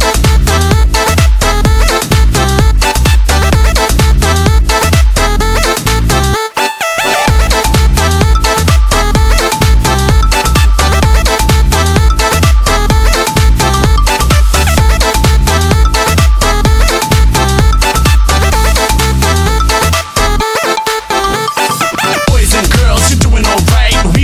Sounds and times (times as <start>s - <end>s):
Music: 0.0s - 24.2s.